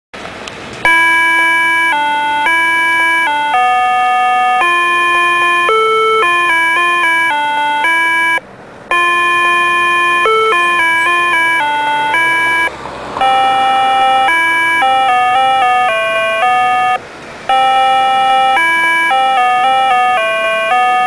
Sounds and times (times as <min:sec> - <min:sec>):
Music: 0:04.7 - 0:08.1, 0:09.5 - 0:12.7.